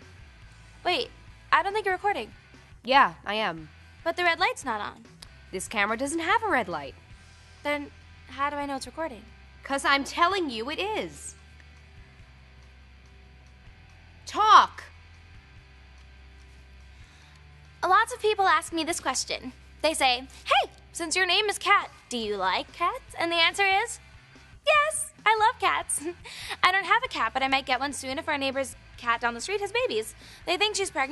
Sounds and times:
Speech: 0.8 - 2.3, 2.9 - 5.0, 5.6 - 6.9, 7.7 - 11.3, 14.3 - 14.9, 17.8 - 24.0, 24.7 - 31.1.

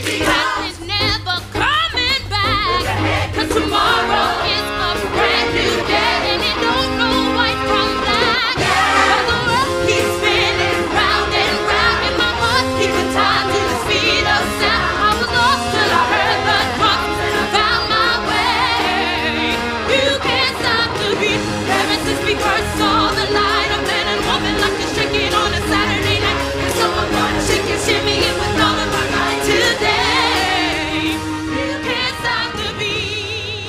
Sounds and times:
Music: 0.0 - 33.6.

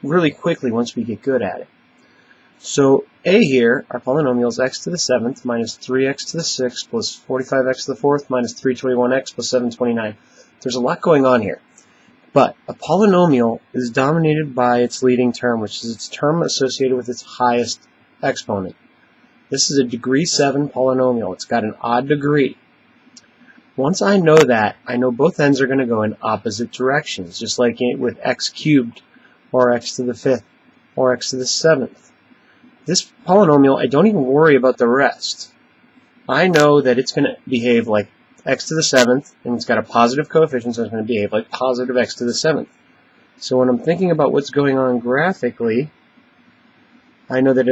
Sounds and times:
Speech: 0.0 - 1.7, 2.6 - 11.7, 12.3 - 18.8, 19.5 - 22.6, 23.7 - 32.1, 32.8 - 35.6, 36.3 - 42.8, 43.4 - 46.0, 47.3 - 47.7.

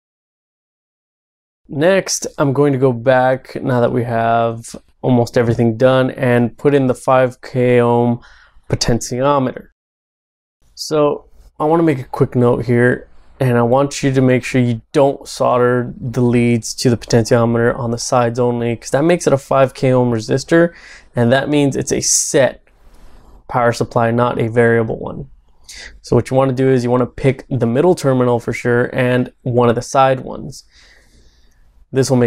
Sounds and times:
Speech: 1.7 - 9.8, 10.8 - 22.6, 23.5 - 30.7, 32.0 - 32.2.

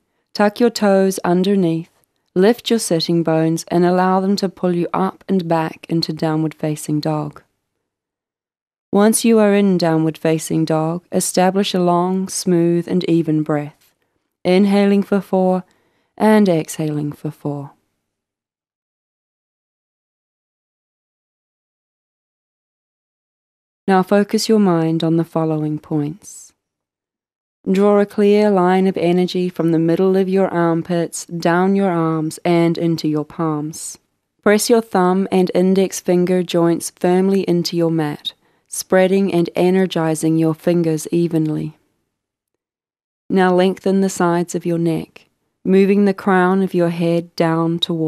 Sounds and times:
Speech: 0.4 - 7.5, 9.0 - 13.9, 14.5 - 17.8, 23.9 - 26.6, 27.7 - 41.8, 43.3 - 48.0.

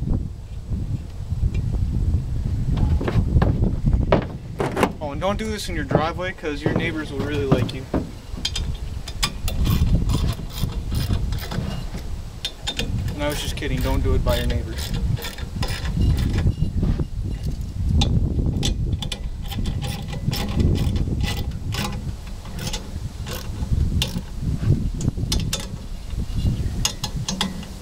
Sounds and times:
Speech: 5.0 - 7.9, 13.1 - 14.8.

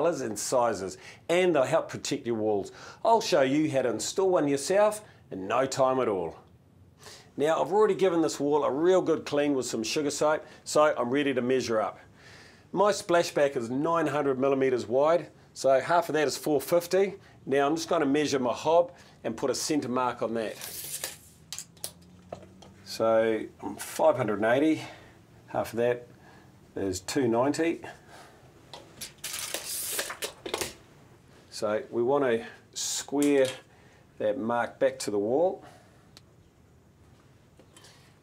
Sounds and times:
Speech: 0.0 - 6.5, 7.4 - 12.0, 12.7 - 20.6, 22.9 - 26.1, 26.8 - 28.0, 31.5 - 33.6, 34.2 - 35.7.

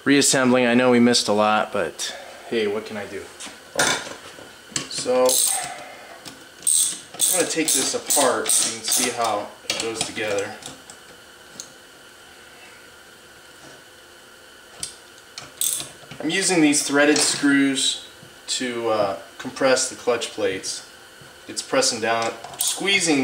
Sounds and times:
Gears: 5.3 - 5.8, 6.6 - 9.3, 15.6 - 15.9
Ratchet, pawl: 5.3 - 5.8, 6.6 - 9.2.

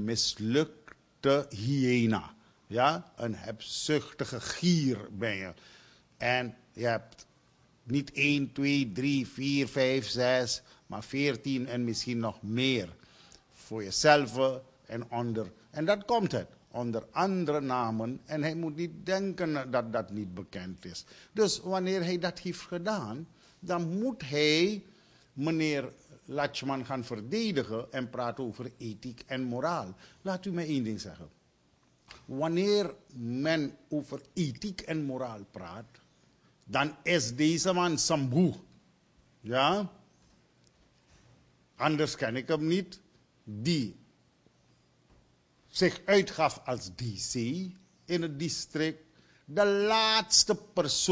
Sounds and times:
Speech: 0.0 - 5.6, 6.2 - 7.3, 7.9 - 13.0, 13.6 - 31.4, 32.3 - 36.0, 36.7 - 38.7, 39.4 - 40.0, 41.8 - 44.0, 45.7 - 51.1.

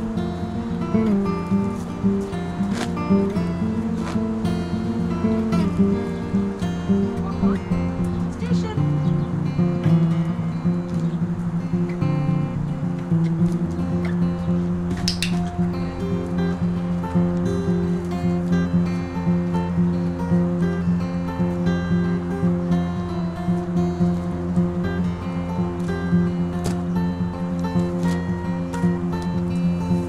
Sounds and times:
Music: 0.0 - 30.0
Speech: 7.2 - 7.6, 8.3 - 9.0.

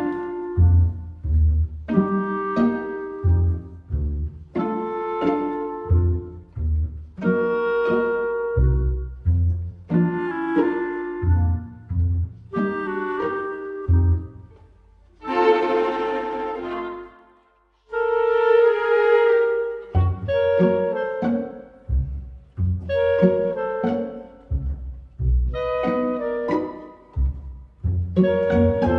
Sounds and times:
Music: 0.0 - 28.9.

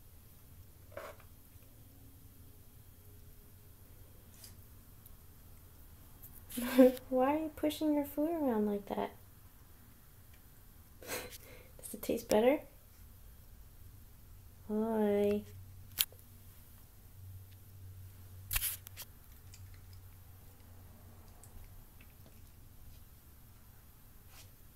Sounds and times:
Speech: 6.6 - 9.2, 11.8 - 12.8, 14.7 - 15.6.

